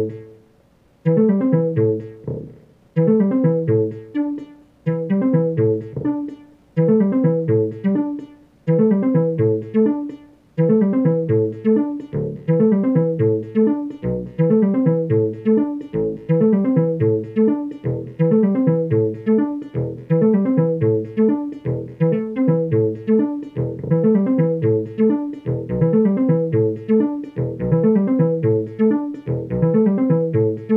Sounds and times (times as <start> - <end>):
Sampler: 1.0 - 30.7.